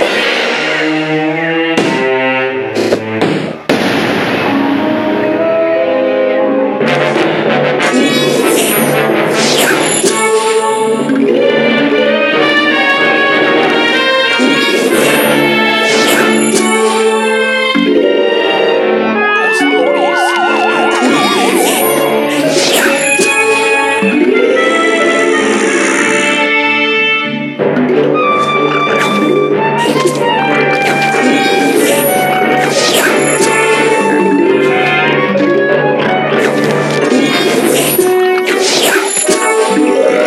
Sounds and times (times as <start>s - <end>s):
Music: 0.0s - 40.2s.